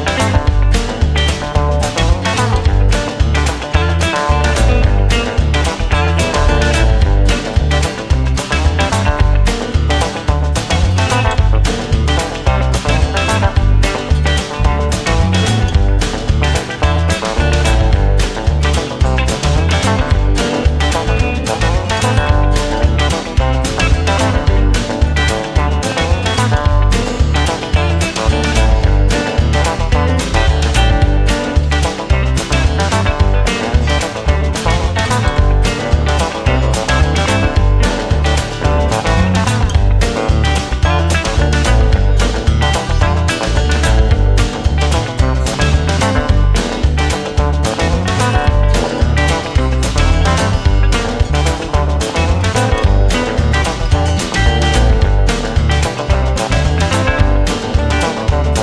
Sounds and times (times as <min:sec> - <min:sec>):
Double bass: 0:00.0 - 0:58.6.